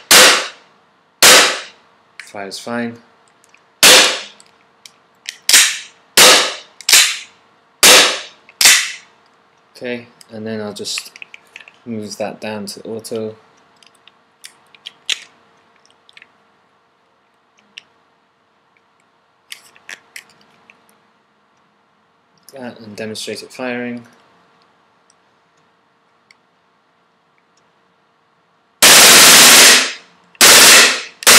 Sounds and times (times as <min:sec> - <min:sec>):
Gunshot, gunfire: 0:00.1 - 0:00.6, 0:01.2 - 0:01.7, 0:03.8 - 0:04.3, 0:05.5 - 0:07.2, 0:07.8 - 0:09.0, 0:28.8 - 0:31.3.